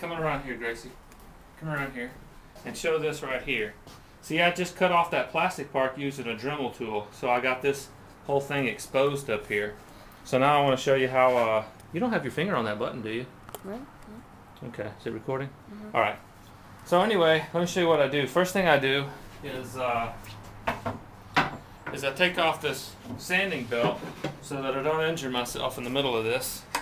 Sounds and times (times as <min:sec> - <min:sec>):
Speech: 0:00.0 - 0:01.0, 0:01.6 - 0:13.8, 0:21.9 - 0:26.6.